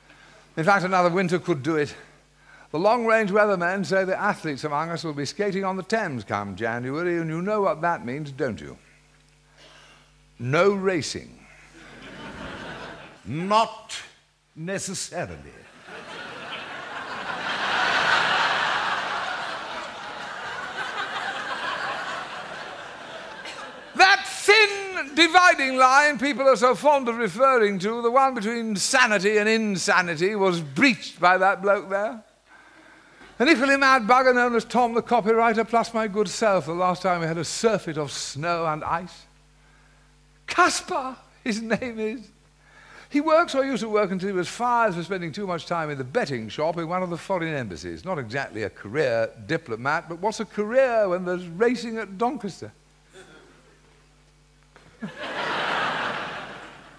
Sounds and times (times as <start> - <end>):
Speech: 0.6 - 2.1, 2.7 - 8.8, 10.4 - 11.4, 13.2 - 15.7, 24.0 - 32.3, 33.4 - 39.3, 40.5 - 42.4, 43.1 - 52.8.